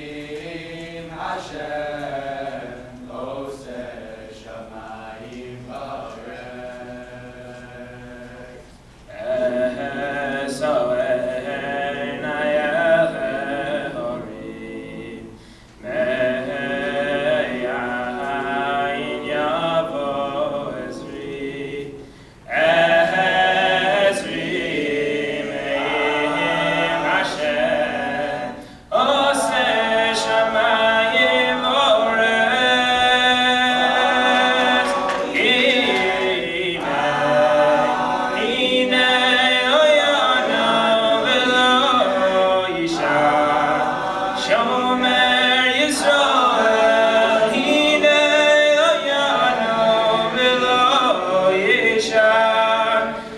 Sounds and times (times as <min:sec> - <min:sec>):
Choir: 0:00.0 - 0:53.3.